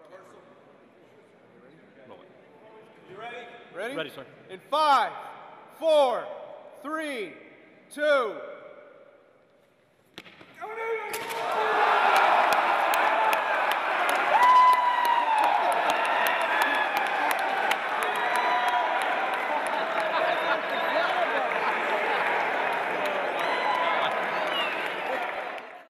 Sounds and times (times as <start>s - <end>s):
Whoop: 11.5s - 20.0s.